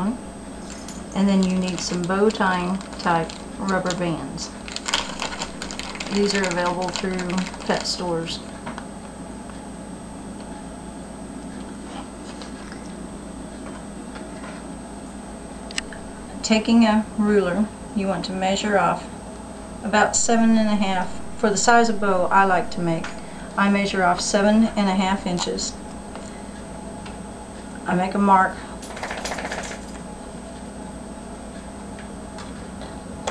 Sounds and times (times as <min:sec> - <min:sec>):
Speech: 0:01.2 - 0:04.6, 0:06.1 - 0:08.4, 0:16.4 - 0:19.1, 0:19.8 - 0:25.8, 0:27.9 - 0:28.6.